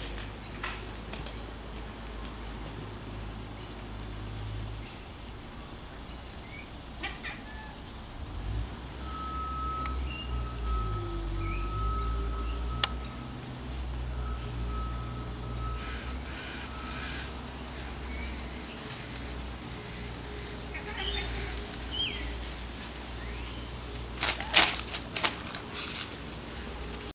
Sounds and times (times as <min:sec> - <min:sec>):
Animal: 0:15.8 - 0:22.3.